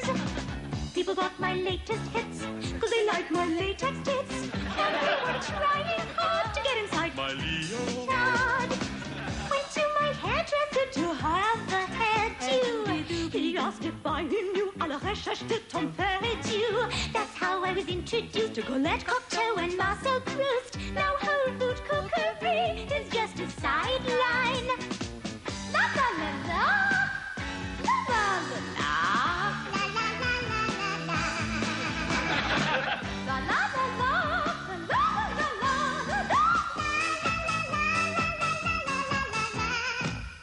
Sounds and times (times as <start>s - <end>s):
Music: 0.0s - 40.4s.